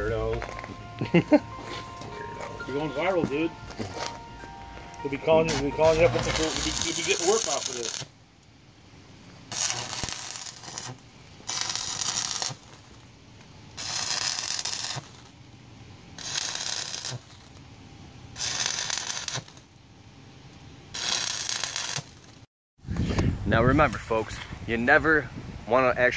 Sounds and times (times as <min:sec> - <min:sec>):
Music: 0:00.0 - 0:07.5
Speech: 0:02.7 - 0:03.5, 0:05.0 - 0:07.9, 0:23.5 - 0:26.1.